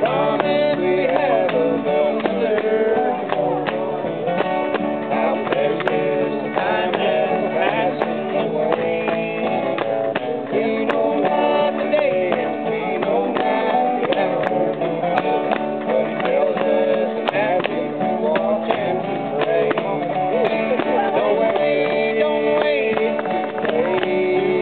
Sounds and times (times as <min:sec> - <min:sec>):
Music: 0:00.0 - 0:24.6.